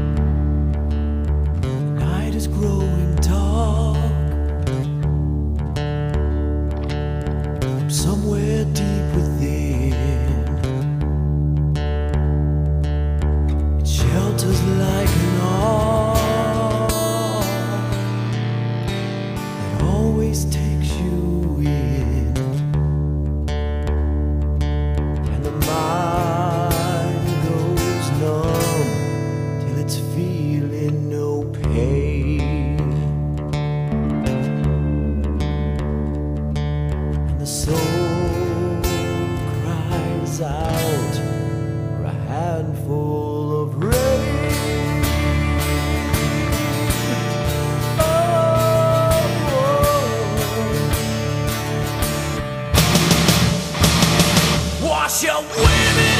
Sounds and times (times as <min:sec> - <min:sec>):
Music: 0:00.0 - 0:56.1.